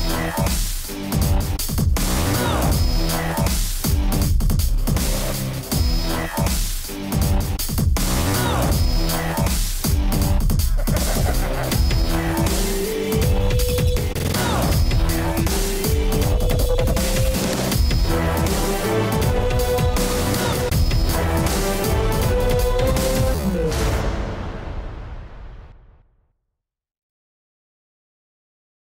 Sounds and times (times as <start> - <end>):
Music: 0.0 - 26.3
Sound effect: 10.2 - 26.5.